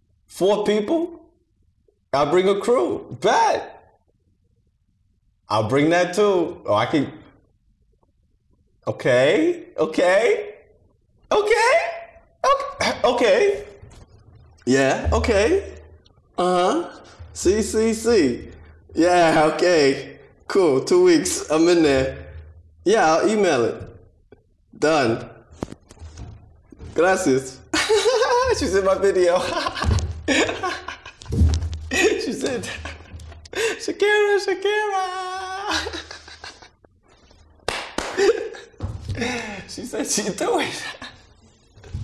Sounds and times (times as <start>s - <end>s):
Inside, small room: 0.0s - 42.0s
Speech: 0.3s - 1.3s, 2.2s - 3.9s, 5.5s - 7.3s, 8.9s - 10.6s, 11.3s - 13.8s, 14.6s - 15.8s, 16.4s - 22.3s, 22.9s - 24.0s, 24.8s - 25.4s, 27.0s - 29.9s, 31.9s - 32.9s, 33.7s - 36.1s, 39.5s - 41.2s.